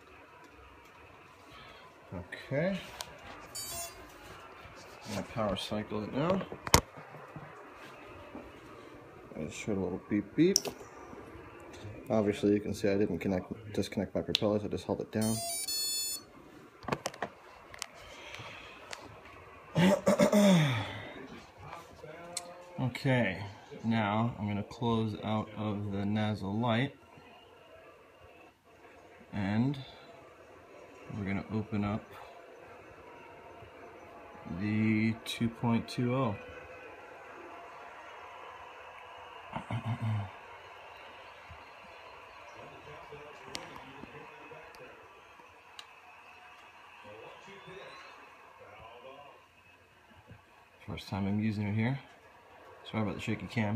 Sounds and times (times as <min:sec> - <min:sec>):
Speech: 0:02.1 - 0:02.9, 0:05.0 - 0:06.5, 0:09.4 - 0:10.6, 0:11.8 - 0:15.4, 0:21.1 - 0:27.0, 0:29.3 - 0:30.1, 0:31.1 - 0:32.3, 0:34.4 - 0:36.5, 0:50.8 - 0:52.1, 0:52.8 - 0:53.7.